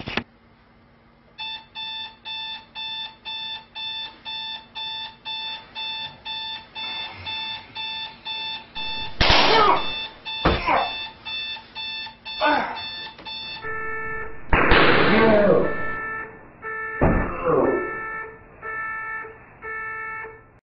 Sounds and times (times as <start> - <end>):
Alarm: 1.4 - 20.6.